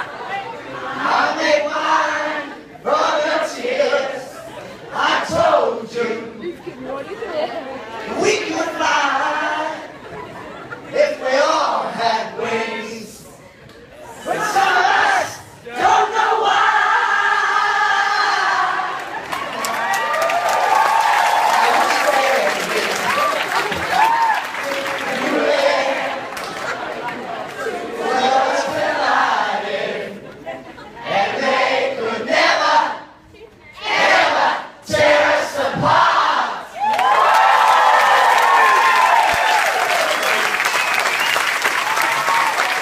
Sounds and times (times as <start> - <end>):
Inside, large room or hall: 0.0 - 42.8
Singing: 0.6 - 6.6, 8.1 - 10.1, 10.9 - 13.4, 14.1 - 19.2, 21.5 - 33.2.